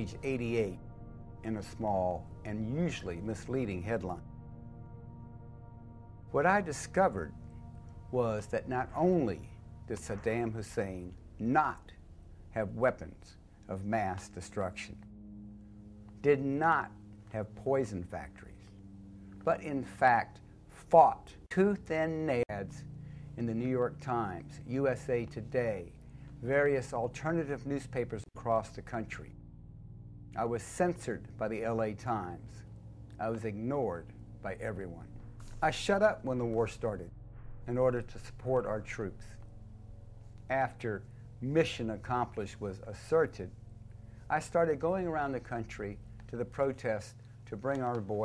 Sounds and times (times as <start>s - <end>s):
Speech: 0.0s - 0.8s, 1.4s - 4.2s, 6.4s - 7.3s, 8.1s - 12.0s, 12.6s - 15.0s, 16.2s - 18.6s, 19.4s - 29.3s, 30.4s - 32.6s, 33.2s - 37.1s, 37.7s - 39.4s, 40.5s - 43.5s, 44.3s - 48.2s.